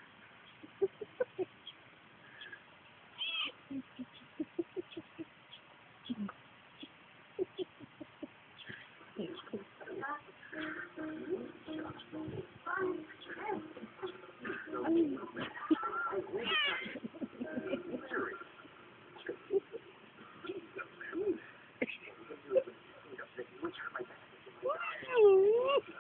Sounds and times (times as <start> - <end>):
Meow: 3.2 - 3.5, 16.4 - 16.9.